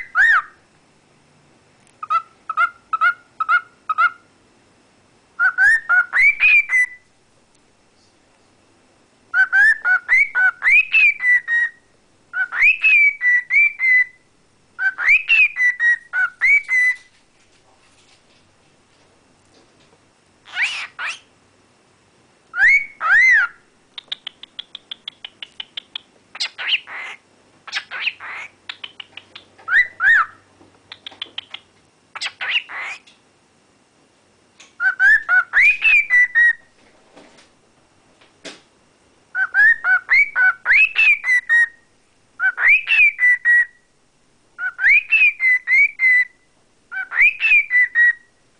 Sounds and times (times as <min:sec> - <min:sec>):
Chirp, tweet: 0:34.8 - 0:36.6, 0:39.4 - 0:41.8, 0:42.4 - 0:43.8, 0:44.6 - 0:46.4, 0:47.0 - 0:48.3.